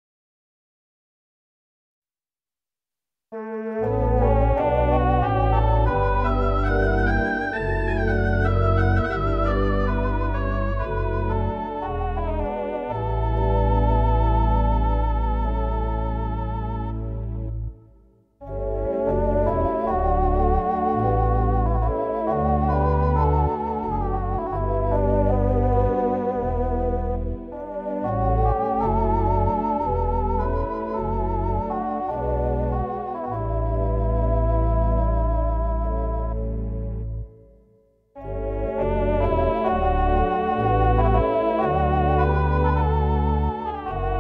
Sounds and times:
Music: 0:03.4 - 0:44.2.

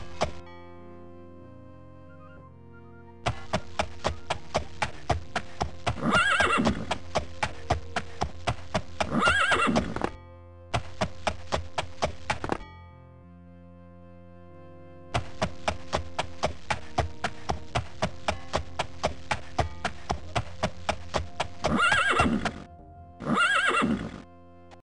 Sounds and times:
Clip-clop: 0:03.3 - 0:10.2, 0:10.8 - 0:12.6, 0:15.2 - 0:22.7
Neigh, whinny: 0:06.0 - 0:06.9, 0:09.1 - 0:10.0, 0:21.7 - 0:24.3.

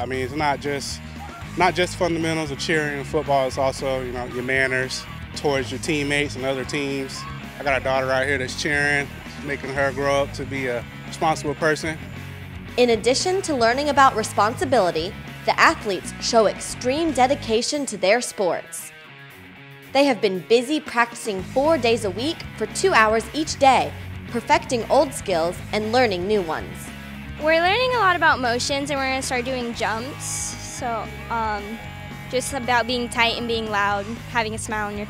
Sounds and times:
Music: 0:00.0 - 0:35.1.

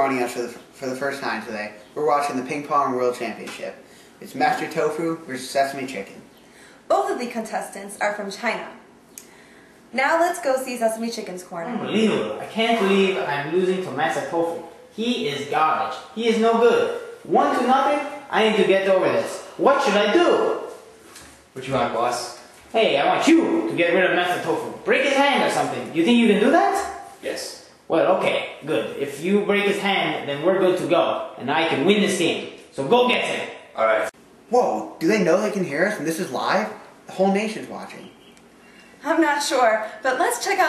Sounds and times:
Speech: 0:11.5 - 0:20.6, 0:21.6 - 0:38.1.

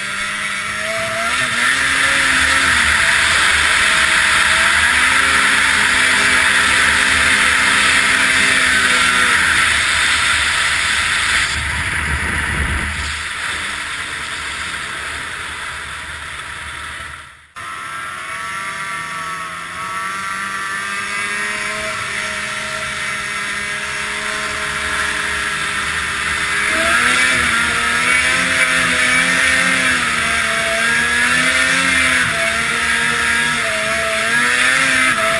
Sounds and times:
Stream: 0:00.1 - 0:17.4.

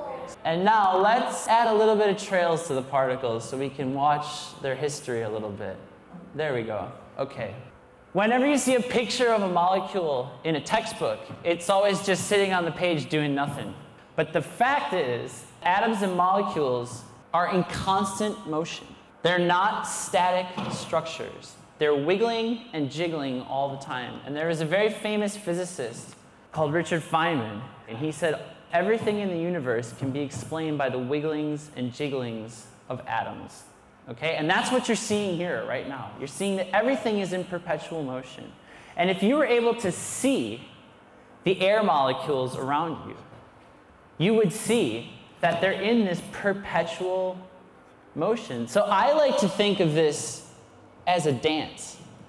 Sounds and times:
Speech: 0:00.0 - 0:40.8, 0:41.4 - 0:43.3, 0:44.2 - 0:47.5, 0:48.2 - 0:52.1.

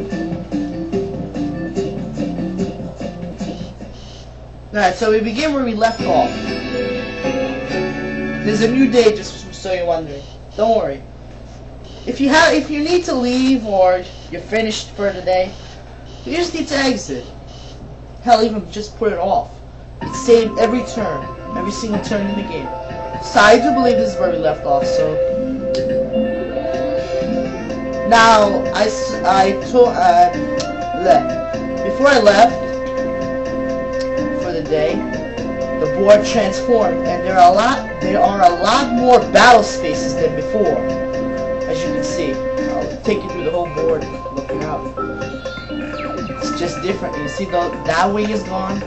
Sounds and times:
Music: 0:00.0 - 0:04.2, 0:05.7 - 0:09.8, 0:20.0 - 0:48.8
Speech: 0:04.8 - 0:06.3, 0:08.5 - 0:11.1, 0:12.1 - 0:15.6, 0:16.3 - 0:17.3, 0:18.2 - 0:19.5, 0:20.1 - 0:25.2, 0:28.1 - 0:30.4, 0:31.0 - 0:31.3, 0:31.9 - 0:32.6, 0:34.4 - 0:35.0, 0:35.8 - 0:40.8, 0:41.7 - 0:45.0, 0:46.4 - 0:48.8.

